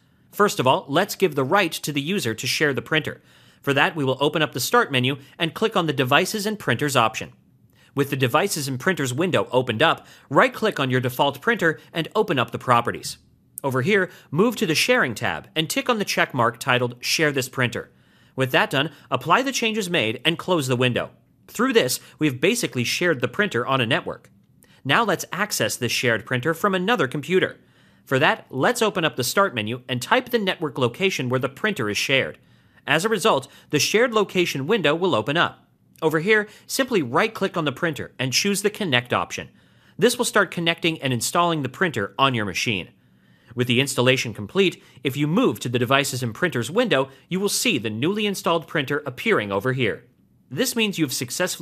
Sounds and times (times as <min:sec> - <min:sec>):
Speech: 0:00.4 - 0:07.4, 0:08.0 - 0:43.0, 0:43.6 - 0:51.6.